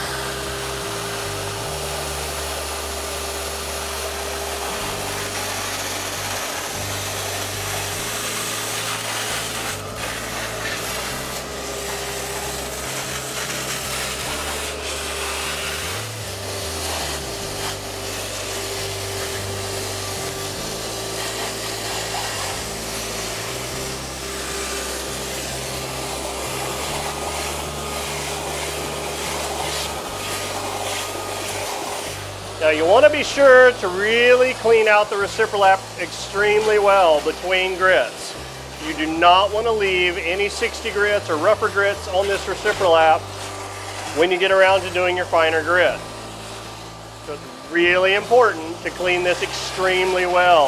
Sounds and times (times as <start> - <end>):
Music: 0.0 - 50.6.